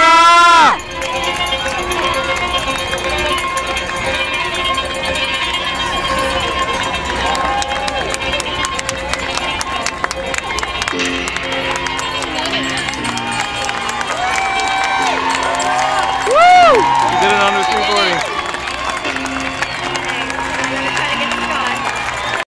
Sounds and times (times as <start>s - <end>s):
Music: 0.0s - 22.4s
Outside, urban or manmade: 0.0s - 22.4s
Speech: 17.1s - 18.2s.